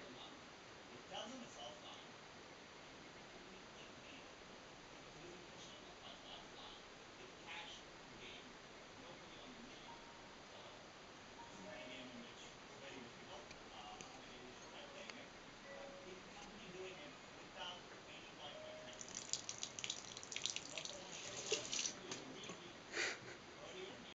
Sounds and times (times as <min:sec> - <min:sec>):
Speech: 0:00.0 - 0:02.2, 0:02.8 - 0:04.4, 0:05.0 - 0:10.8, 0:11.4 - 0:19.1, 0:20.6 - 0:22.9, 0:23.5 - 0:24.1
Sink (filling or washing): 0:19.0 - 0:22.0.